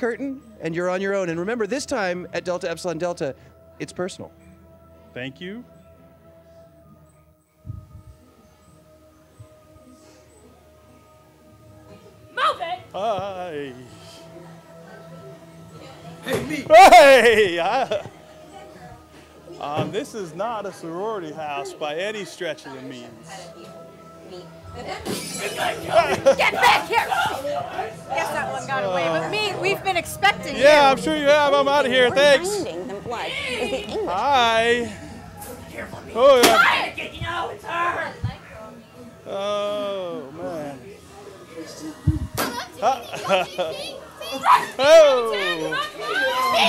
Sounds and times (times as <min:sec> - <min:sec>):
Music: 0:00.0 - 0:46.6
Chatter: 0:07.5 - 0:46.6.